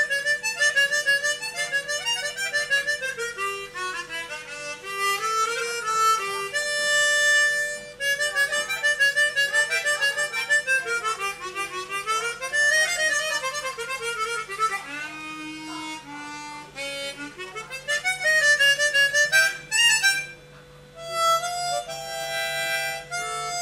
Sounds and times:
Harmonica: 0:00.0 - 0:23.6.

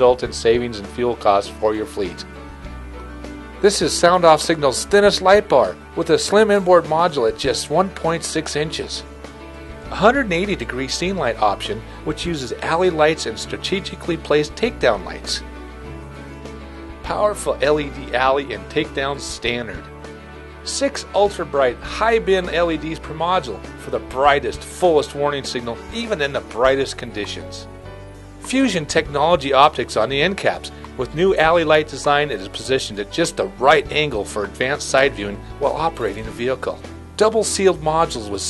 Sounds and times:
Speech: 0:00.0 - 0:02.3, 0:03.6 - 0:09.0, 0:09.9 - 0:15.4, 0:17.0 - 0:19.9, 0:20.7 - 0:27.6, 0:28.5 - 0:38.4
Music: 0:00.0 - 0:38.4.

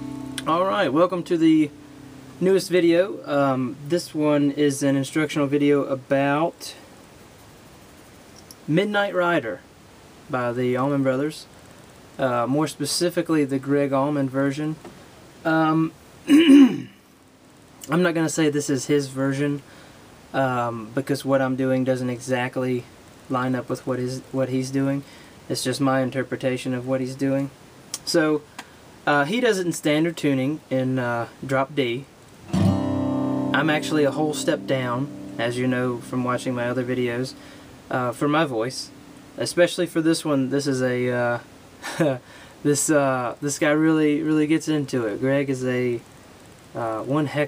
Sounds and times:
Speech: 0:00.4 - 0:01.8, 0:02.4 - 0:06.9, 0:08.6 - 0:09.7, 0:10.3 - 0:11.5, 0:12.2 - 0:16.9, 0:17.8 - 0:19.7, 0:20.3 - 0:28.5, 0:29.1 - 0:32.1, 0:33.6 - 0:46.1, 0:46.8 - 0:47.4.

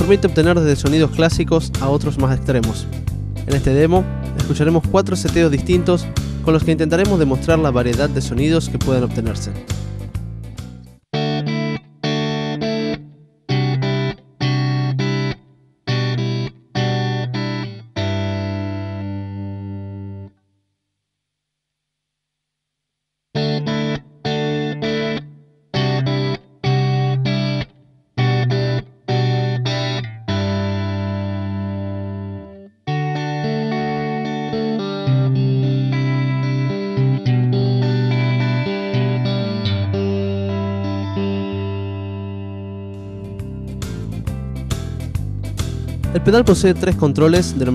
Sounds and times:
Music: 0:00.0 - 0:20.5, 0:23.4 - 0:47.7
Distortion: 0:00.0 - 0:47.7.

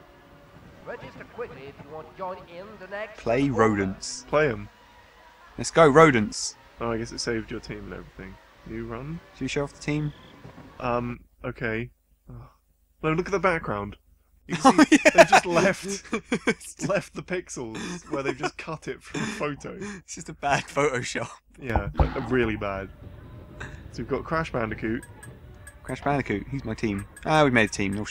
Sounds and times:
Speech: 0:00.9 - 0:04.7, 0:05.6 - 0:10.2, 0:10.8 - 0:22.9, 0:24.0 - 0:25.0, 0:25.9 - 0:28.1.

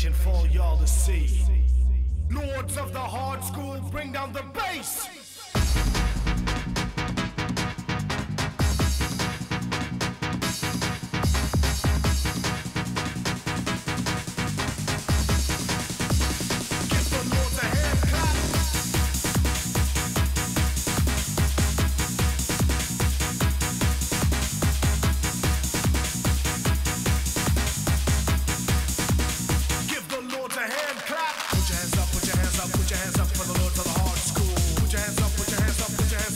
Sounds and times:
Dance music: 0:00.0 - 0:36.3.

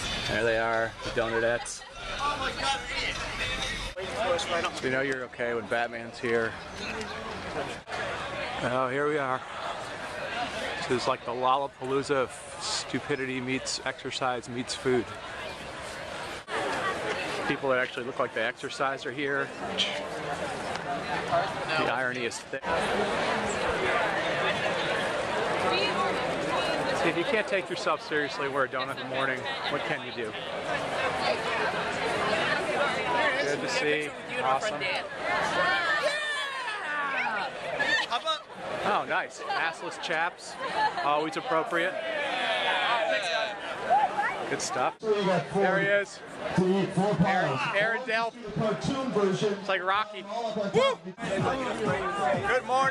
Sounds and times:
Outside, urban or manmade: 0:00.0 - 0:52.9.

